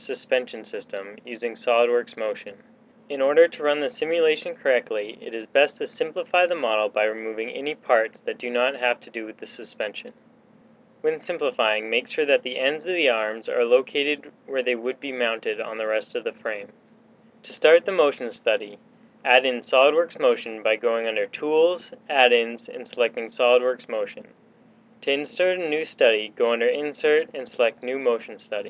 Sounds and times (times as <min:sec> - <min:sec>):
Speech: 0:00.0 - 0:10.2, 0:11.1 - 0:16.8, 0:17.5 - 0:24.4, 0:25.0 - 0:28.7.